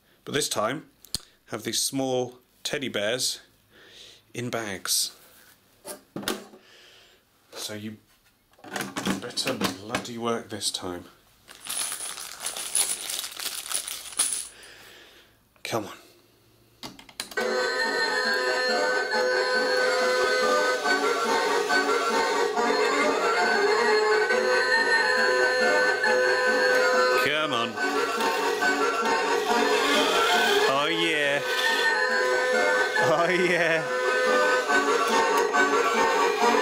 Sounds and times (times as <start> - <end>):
Speech: 0.2 - 0.9, 1.5 - 3.5, 4.3 - 5.2, 7.5 - 8.0, 9.2 - 11.2, 15.6 - 16.1, 27.2 - 27.8, 30.6 - 31.5, 33.0 - 33.9
Crumpling, crinkling: 11.5 - 14.5.